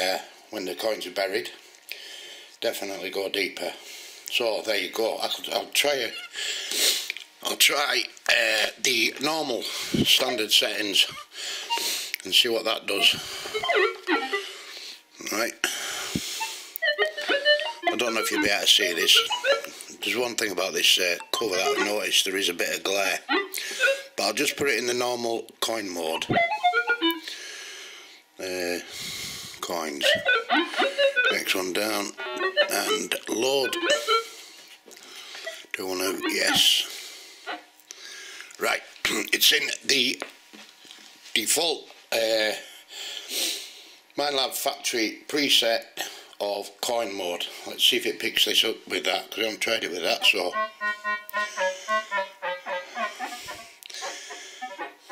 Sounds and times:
Speech: 0.0 - 1.6, 2.6 - 6.2, 7.4 - 11.2, 12.2 - 13.2, 15.2 - 15.6, 17.9 - 19.3, 19.9 - 23.2, 24.2 - 26.4, 28.4 - 28.9, 29.6 - 30.2, 31.3 - 33.8, 35.7 - 36.9, 38.6 - 40.2, 41.3 - 42.6, 44.2 - 50.6.

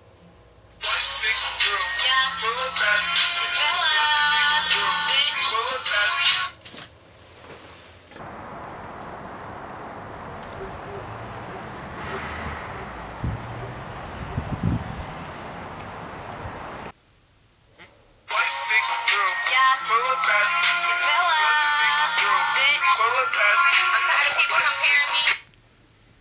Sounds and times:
Music: 0.8 - 6.5, 18.3 - 25.4
Speech: 23.9 - 25.4.

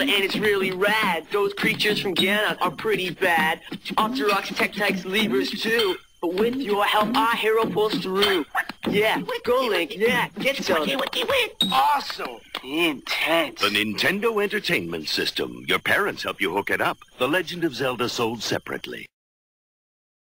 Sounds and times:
Speech: 0.0 - 19.2.

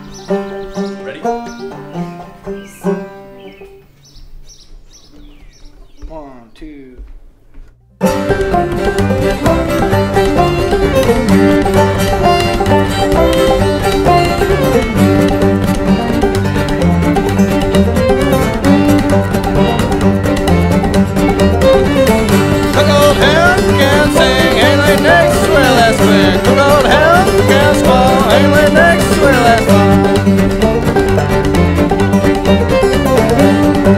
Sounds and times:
Bluegrass: 0.0 - 33.9.

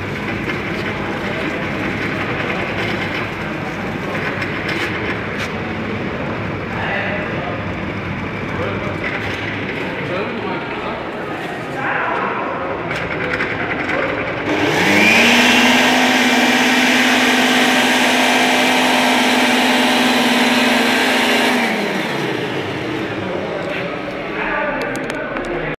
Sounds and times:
Speech: 0.8 - 14.5, 23.1 - 25.7.

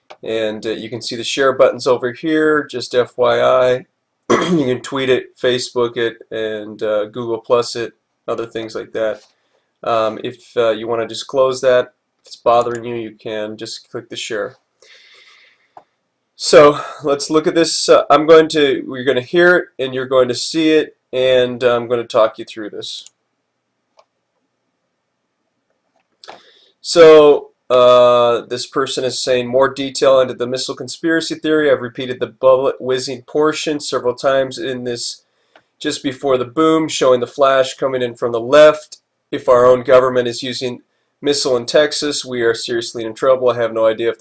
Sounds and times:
Speech: 0.2 - 14.6, 16.4 - 23.2, 26.8 - 35.2, 35.8 - 44.2.

